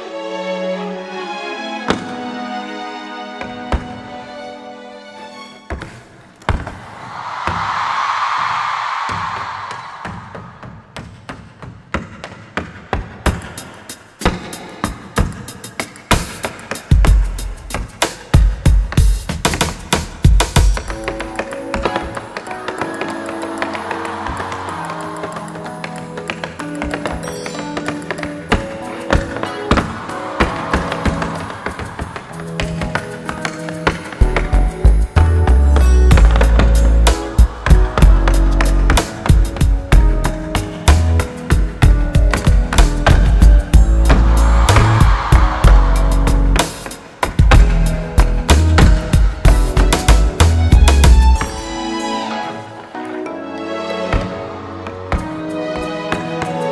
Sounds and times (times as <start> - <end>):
Music: 0.0 - 6.9, 9.1 - 56.7.